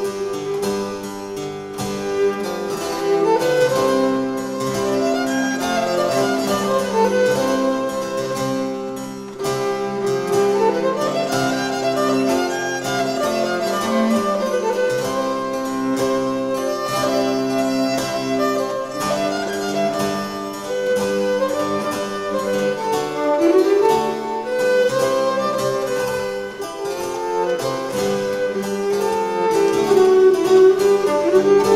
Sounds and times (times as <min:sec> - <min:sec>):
Classical music: 0:00.0 - 0:31.7
Harpsichord: 0:00.0 - 0:31.7
Violin, fiddle: 0:00.0 - 0:31.7.